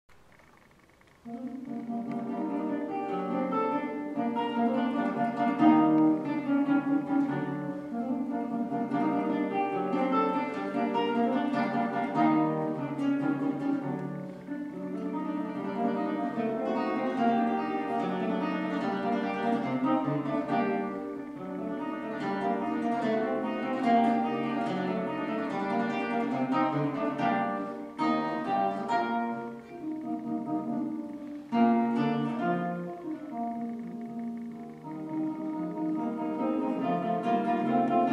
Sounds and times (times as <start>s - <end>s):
Guitar: 0.1s - 38.1s
Bowed string instrument: 1.2s - 38.1s.